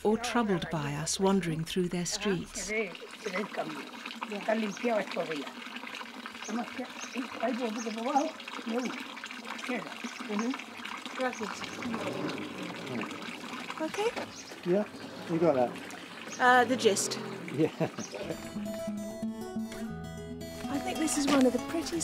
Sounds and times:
Speech: 0.0s - 3.8s
Outside, urban or manmade: 0.0s - 22.0s.

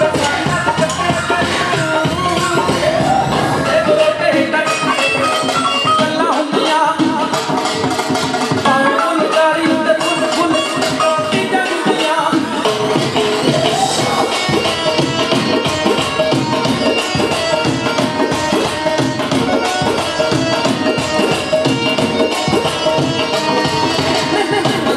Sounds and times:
Singing: 0.0s - 7.6s, 8.6s - 15.6s
Tabla: 0.0s - 24.9s.

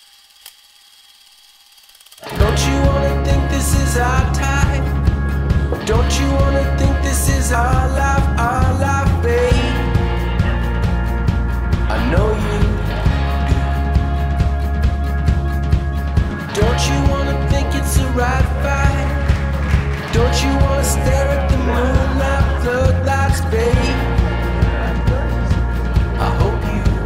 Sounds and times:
Music: 2.2s - 27.0s.

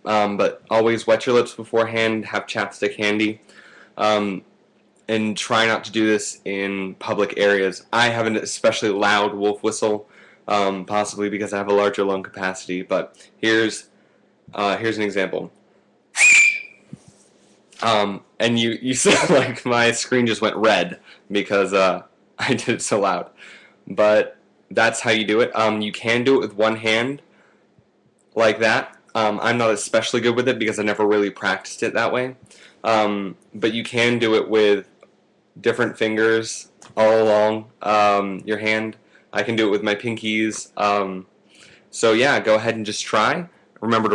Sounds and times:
Speech: 0.0s - 3.4s, 4.0s - 4.5s, 5.1s - 13.9s, 14.5s - 15.6s, 17.8s - 27.2s, 28.4s - 35.0s, 35.6s - 41.3s, 41.9s - 44.1s.

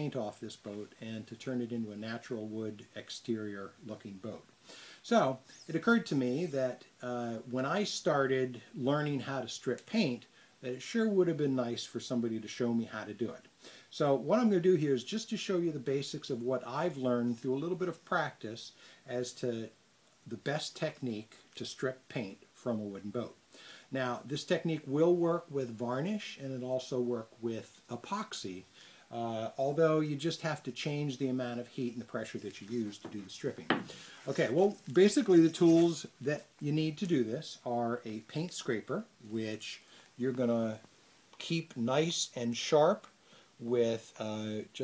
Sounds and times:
Speech: 0.0s - 44.8s.

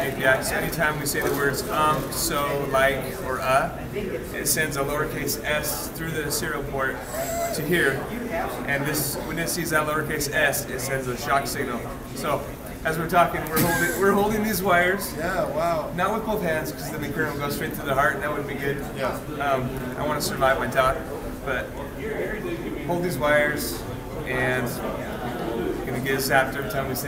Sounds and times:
Conversation: 0.0s - 27.0s.

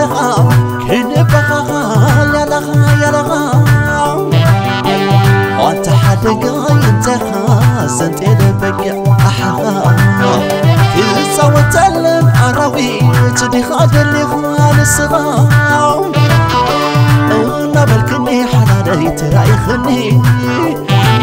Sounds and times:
Middle Eastern music: 0.0s - 21.2s.

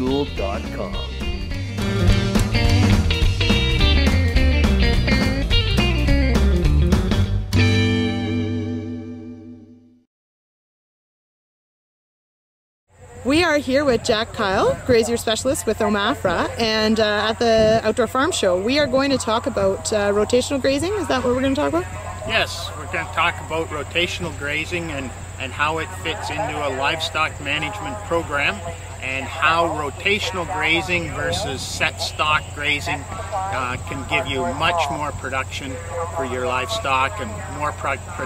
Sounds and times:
Speech: 13.3s - 38.2s.

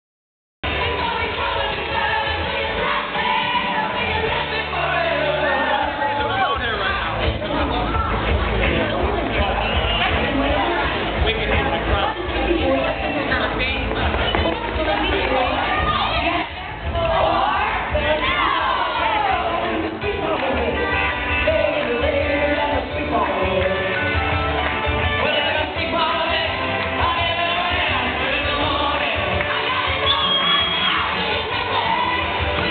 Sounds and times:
Inside, large room or hall: 0.6s - 32.7s
Music: 0.6s - 32.7s.

